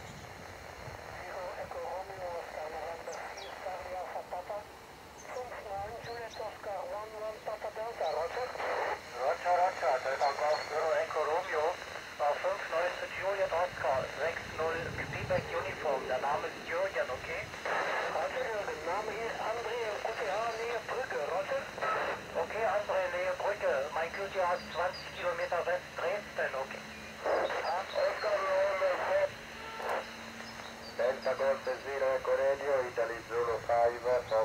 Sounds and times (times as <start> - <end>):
Speech: 1.2 - 4.7, 5.3 - 29.3, 31.0 - 34.4.